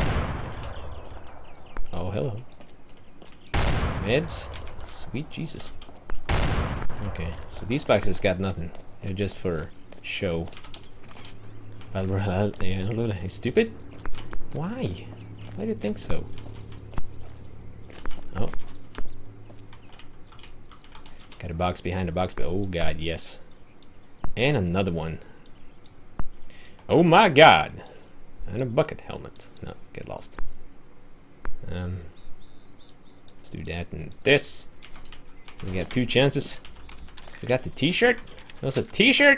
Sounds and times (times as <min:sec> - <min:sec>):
Gunshot, gunfire: 0:00.0 - 0:01.0, 0:03.6 - 0:04.4, 0:06.3 - 0:07.4
Speech: 0:01.9 - 0:02.5, 0:04.0 - 0:05.8, 0:07.0 - 0:10.6, 0:11.9 - 0:13.8, 0:14.5 - 0:16.4, 0:18.3 - 0:18.6, 0:21.4 - 0:23.5, 0:24.4 - 0:25.2, 0:26.9 - 0:30.4, 0:31.6 - 0:32.1, 0:33.4 - 0:34.7, 0:35.6 - 0:36.6, 0:37.4 - 0:39.3.